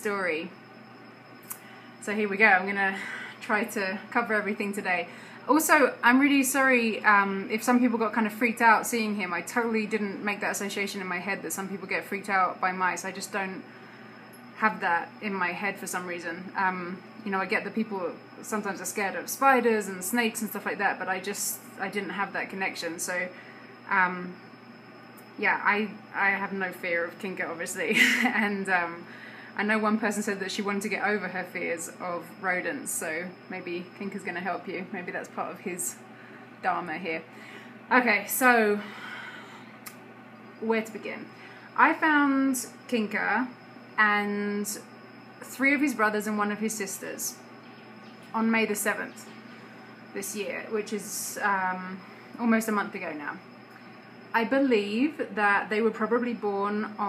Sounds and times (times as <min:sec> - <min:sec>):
Speech: 0:00.0 - 0:00.6, 0:02.0 - 0:13.6, 0:14.6 - 0:24.4, 0:25.4 - 0:36.0, 0:36.6 - 0:37.3, 0:37.9 - 0:38.9, 0:40.6 - 0:47.4, 0:48.3 - 0:49.3, 0:50.2 - 0:53.4, 0:54.4 - 0:57.0.